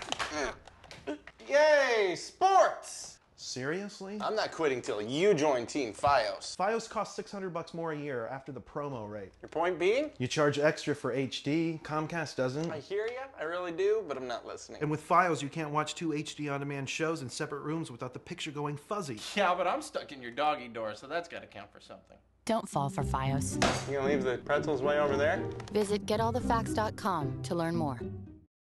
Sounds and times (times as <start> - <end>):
Music: 22.6 - 28.5.